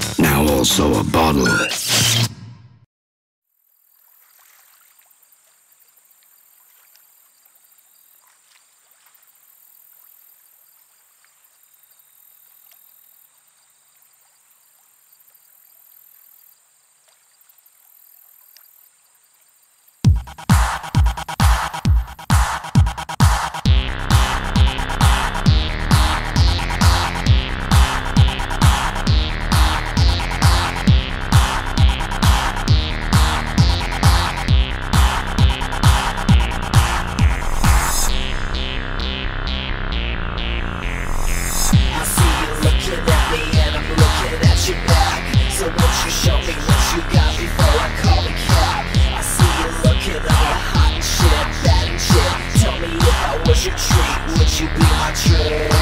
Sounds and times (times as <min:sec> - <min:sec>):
Environmental noise: 0:03.6 - 0:20.1.